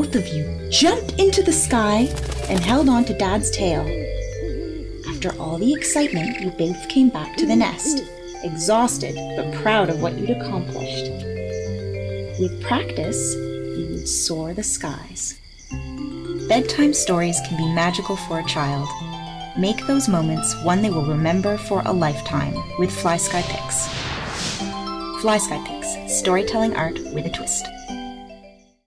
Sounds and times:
Speech: 0.0 - 3.9, 5.1 - 11.1, 12.4 - 15.4, 16.5 - 18.9, 19.6 - 23.9, 25.2 - 27.7
Bird: 0.0 - 19.0
Background music: 0.0 - 28.8.

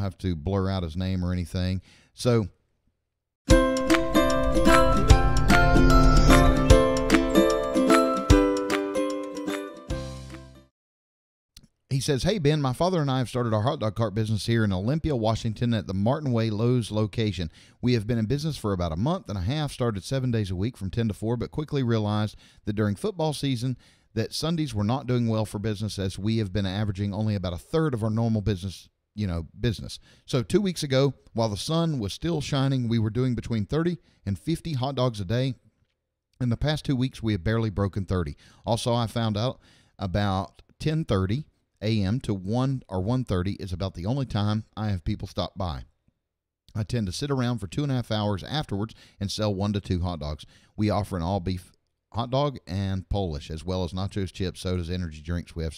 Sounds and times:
Speech: 0.0 - 2.6, 11.9 - 35.6, 36.4 - 45.9, 46.7 - 55.7
Music: 3.5 - 10.7.

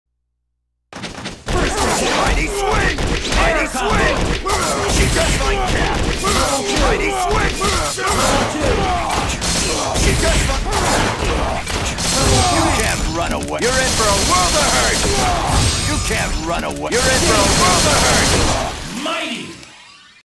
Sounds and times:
Speech: 1.6 - 11.6, 12.2 - 19.6.

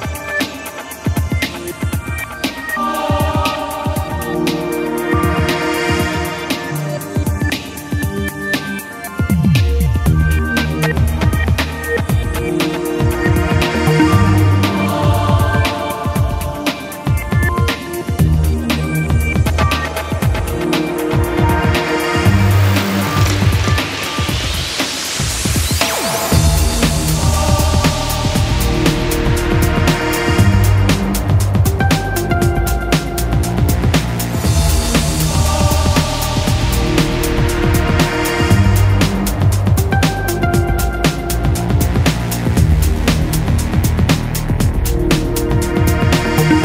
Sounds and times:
Music: 0.0 - 46.6.

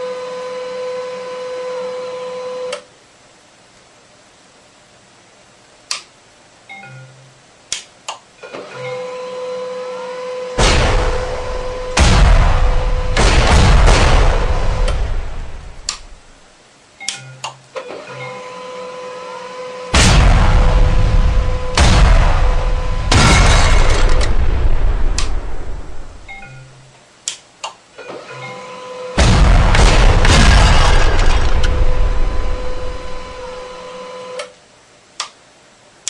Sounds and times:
Printer: 8.4 - 10.6, 17.8 - 19.9, 28.0 - 29.2, 33.6 - 34.5.

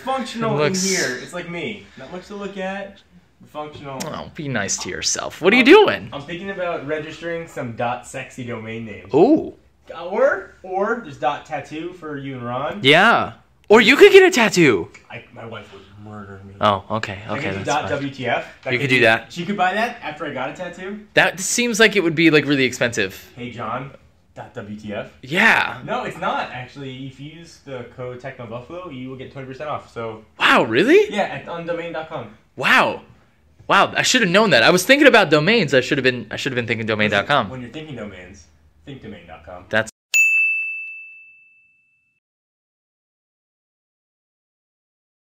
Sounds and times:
Ding: 40.1 - 42.2.

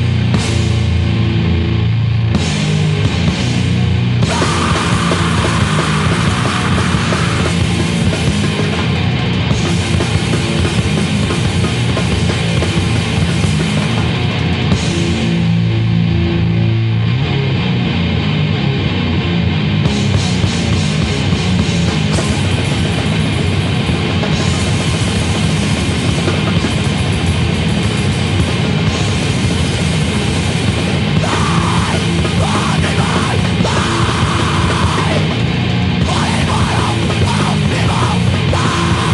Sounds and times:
Music: 0.0 - 39.1.

